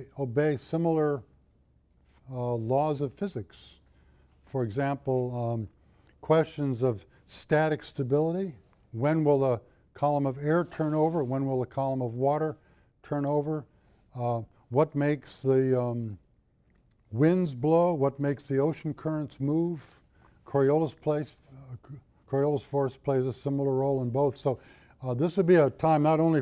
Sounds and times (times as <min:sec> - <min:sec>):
Speech: 0:00.0 - 0:01.3, 0:02.2 - 0:03.8, 0:04.5 - 0:16.2, 0:17.1 - 0:26.4.